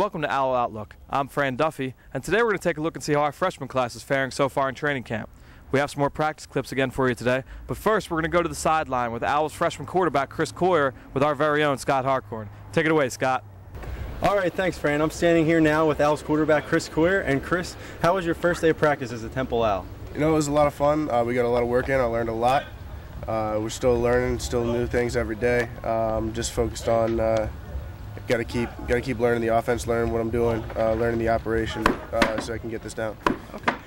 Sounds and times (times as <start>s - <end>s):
Speech: 0.0s - 13.4s, 14.2s - 27.5s, 28.2s - 33.7s.